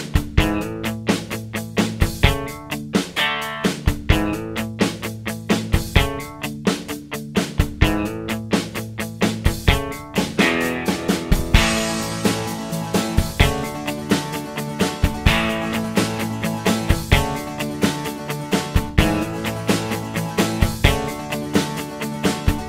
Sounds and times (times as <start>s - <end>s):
Music: 0.0s - 22.6s.